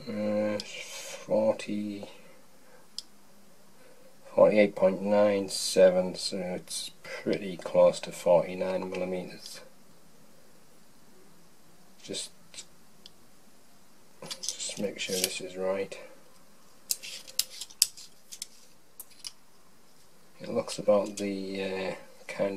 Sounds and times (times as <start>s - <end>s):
Speech: 0.0s - 2.2s, 4.3s - 9.7s, 12.0s - 12.7s, 14.5s - 16.2s, 20.4s - 22.5s
Inside, small room: 0.0s - 22.5s.